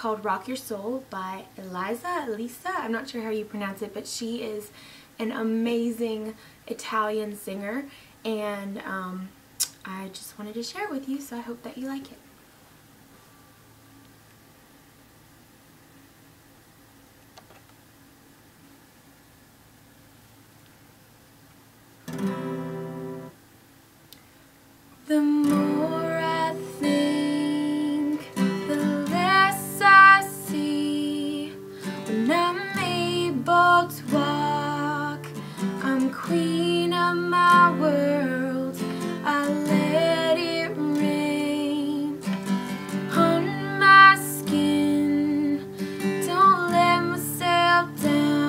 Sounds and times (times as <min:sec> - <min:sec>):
Music: 0:22.1 - 0:23.4, 0:25.3 - 0:48.4
Female singing: 0:25.1 - 0:42.3, 0:43.0 - 0:48.4.